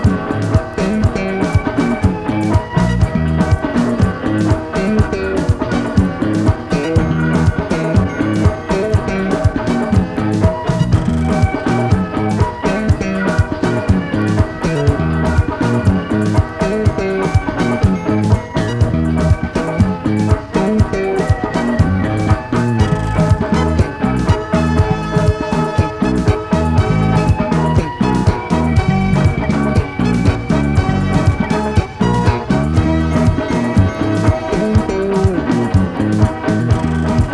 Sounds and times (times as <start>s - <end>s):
Music: 0.0s - 37.3s.